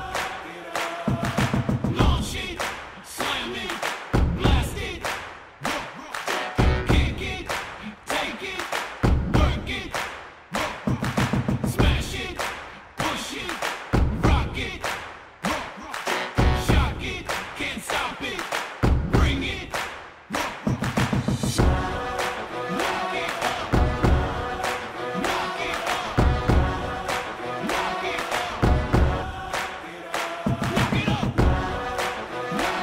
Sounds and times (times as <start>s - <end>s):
Music: 0.0s - 7.8s, 8.7s - 12.6s, 13.9s - 18.1s, 18.8s - 32.8s.